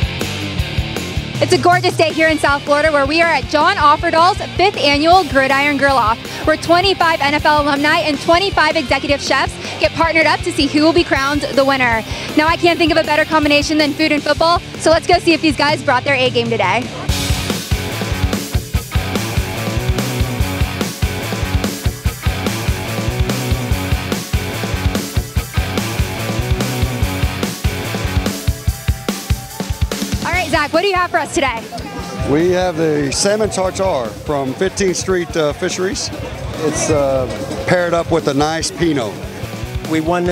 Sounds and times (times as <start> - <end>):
Grunge: 0.0 - 35.0.